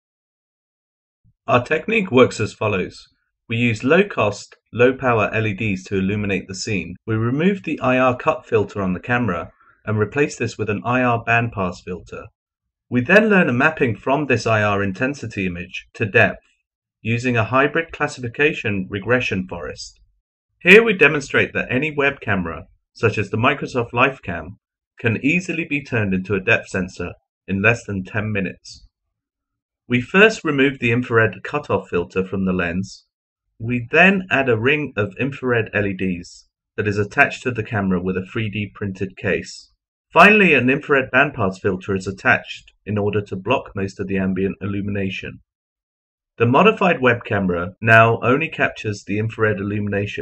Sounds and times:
Speech: 1.5 - 12.3, 12.9 - 16.4, 17.0 - 20.0, 20.6 - 28.9, 29.9 - 45.4, 46.4 - 50.2.

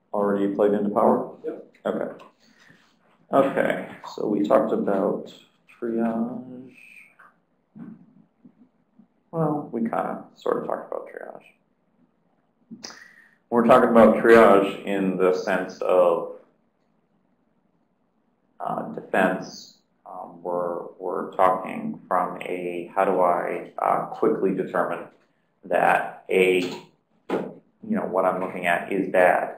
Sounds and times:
Speech: 0.0 - 2.3, 3.3 - 7.2, 9.4 - 11.5, 12.8 - 16.4, 18.6 - 29.5.

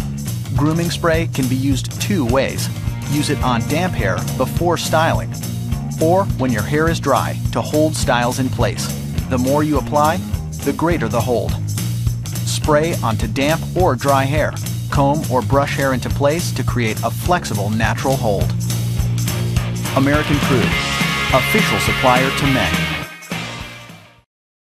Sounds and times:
Music: 0.0 - 24.3
Speech: 0.5 - 5.4, 6.0 - 11.6, 12.5 - 18.6, 20.0 - 20.8, 21.4 - 22.9.

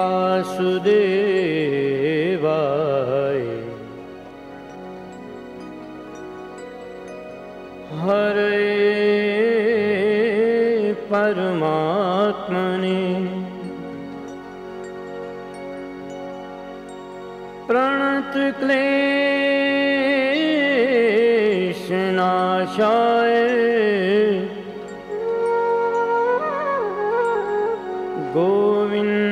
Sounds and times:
Carnatic music: 0.0 - 29.3.

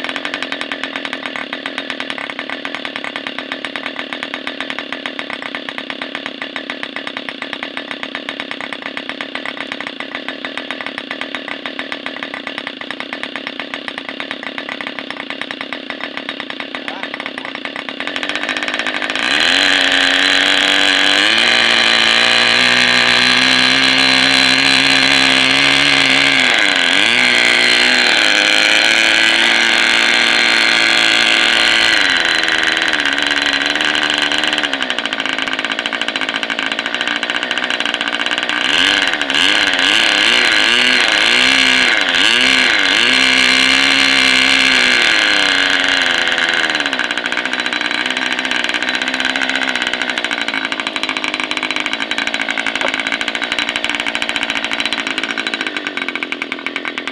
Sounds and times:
Idling: 0.0 - 57.1
Medium engine (mid frequency): 0.0 - 57.1
Speech: 16.8 - 17.6.

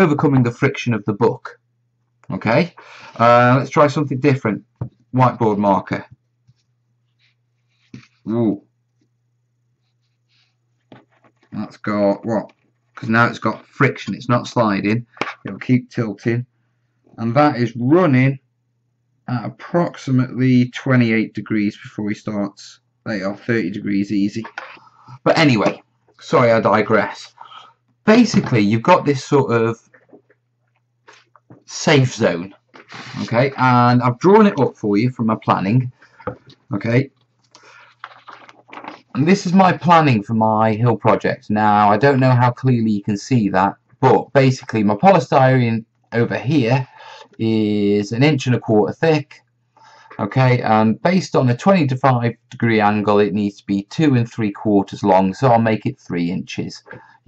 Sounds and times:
Speech: 0.0 - 1.6, 2.3 - 6.2, 8.0 - 8.6, 11.5 - 16.5, 17.2 - 18.4, 19.2 - 29.9, 31.6 - 36.0, 36.7 - 37.1, 38.1 - 49.5, 50.1 - 57.0
Inside, small room: 0.0 - 57.2.

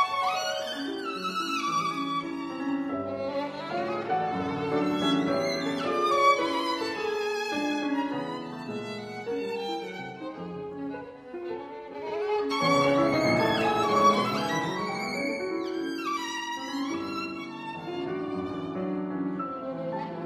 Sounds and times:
Violin, fiddle: 0.0 - 20.2.

